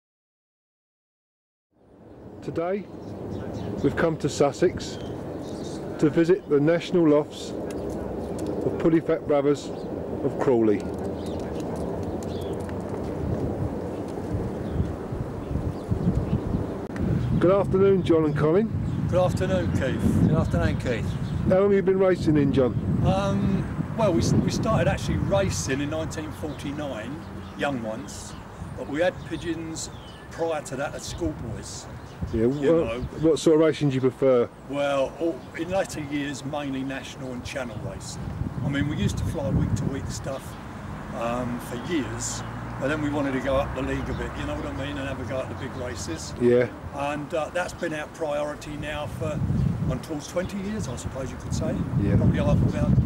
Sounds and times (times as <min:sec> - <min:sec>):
Bird: 0:02.1 - 0:08.7, 0:10.6 - 0:12.7, 0:24.9 - 0:39.5
Speech: 0:02.4 - 0:07.6, 0:08.6 - 0:11.7, 0:17.4 - 0:40.6, 0:41.2 - 0:53.0.